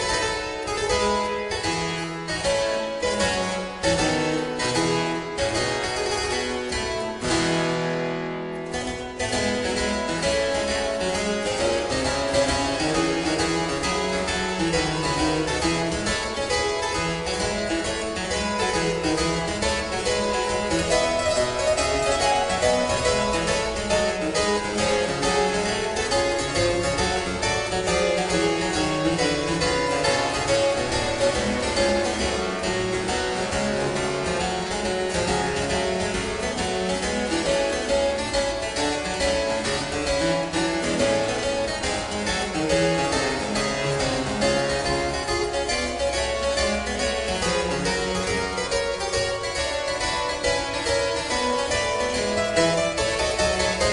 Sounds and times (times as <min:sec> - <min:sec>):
Harpsichord: 0:00.0 - 0:53.9.